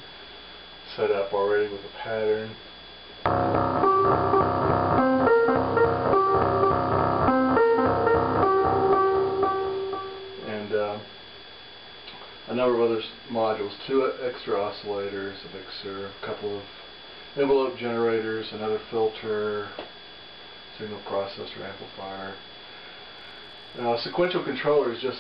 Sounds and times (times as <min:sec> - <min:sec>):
Speech: 0:00.9 - 0:02.7, 0:10.4 - 0:11.1, 0:12.5 - 0:16.8, 0:17.4 - 0:19.9, 0:20.7 - 0:22.4, 0:23.8 - 0:25.2.